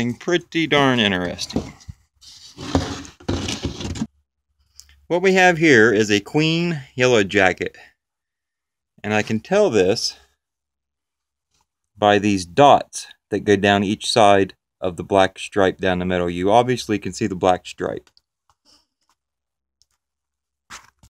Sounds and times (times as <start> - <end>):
Speech: 0.0 - 1.8, 5.1 - 7.9, 9.0 - 10.3, 12.0 - 18.1.